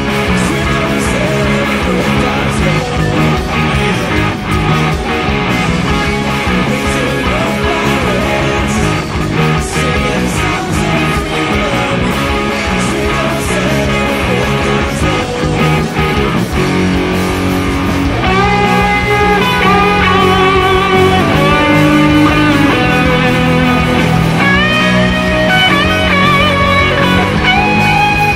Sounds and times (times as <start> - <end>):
Singing: 0.0 - 4.4, 5.9 - 16.4
Guitar: 0.0 - 28.3.